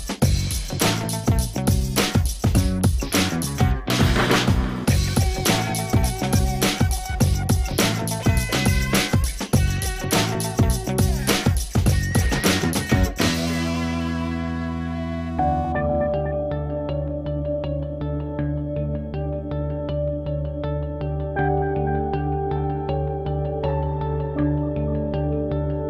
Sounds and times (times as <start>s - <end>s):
Music: 0.0s - 25.8s.